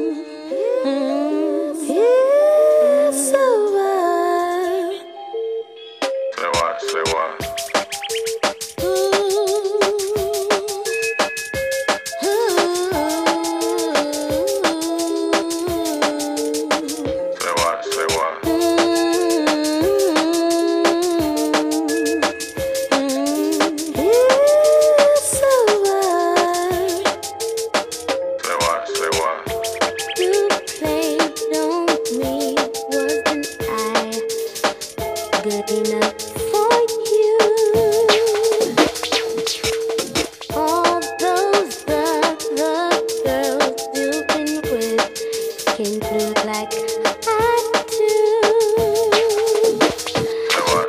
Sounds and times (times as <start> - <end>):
Music: 0.0 - 50.8.